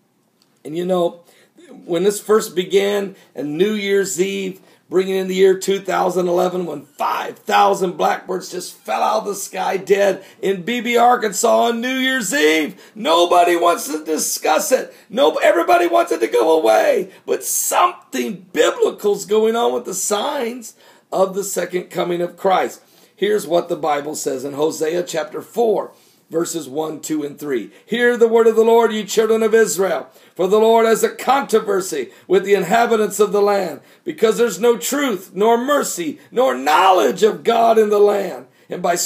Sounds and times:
Speech: 0.6s - 39.0s.

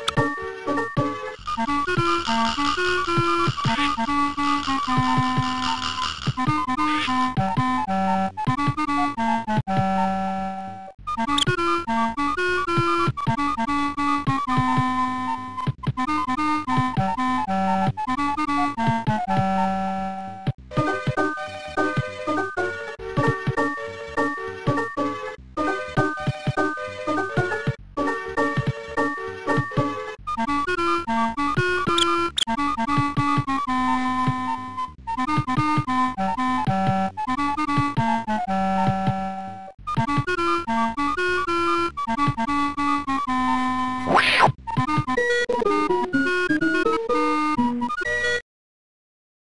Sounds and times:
Music: 0.0s - 48.4s.

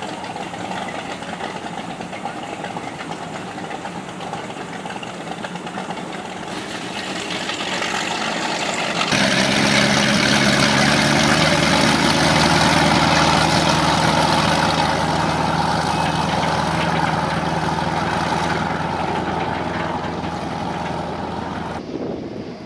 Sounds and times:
Motorboat, speedboat: 0.0s - 21.9s.

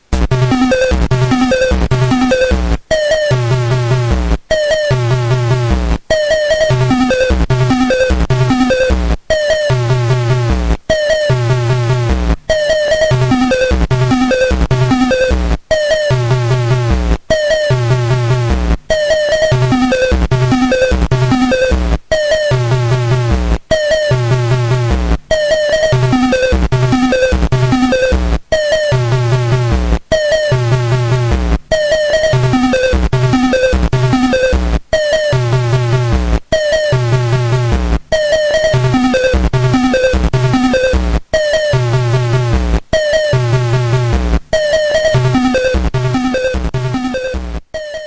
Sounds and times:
Music: 0.0s - 48.0s.

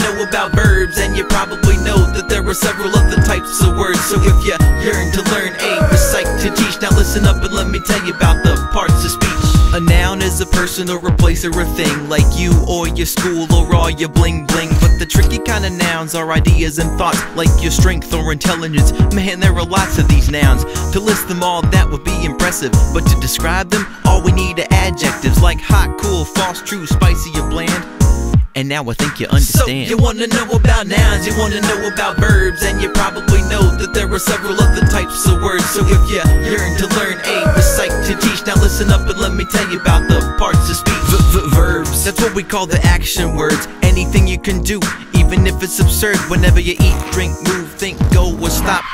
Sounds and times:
Music: 0.0s - 48.9s.

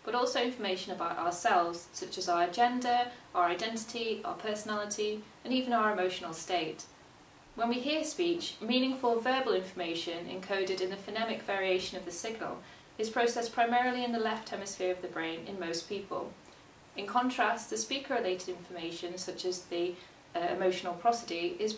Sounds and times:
Female speech, woman speaking: 0.0s - 6.9s, 7.6s - 16.4s, 17.0s - 21.7s
Narration, monologue: 0.0s - 21.7s.

